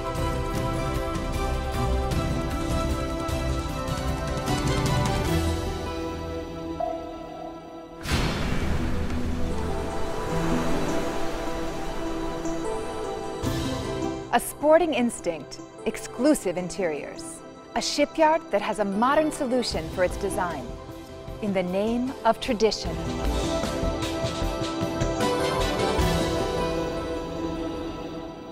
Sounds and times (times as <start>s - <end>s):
Music: 0.0s - 28.5s.